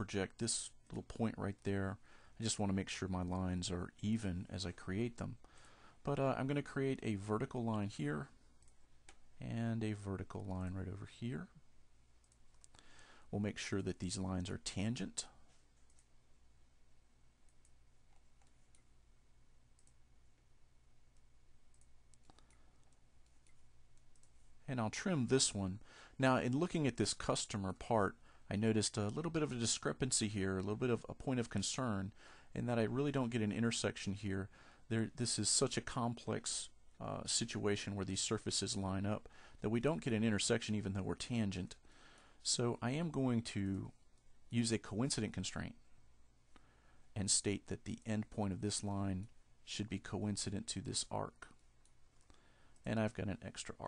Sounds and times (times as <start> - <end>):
Speech: 0.0 - 5.4, 6.0 - 8.4, 9.4 - 11.6, 13.3 - 15.4, 24.6 - 41.8, 42.4 - 45.8, 47.2 - 51.6, 52.8 - 53.8.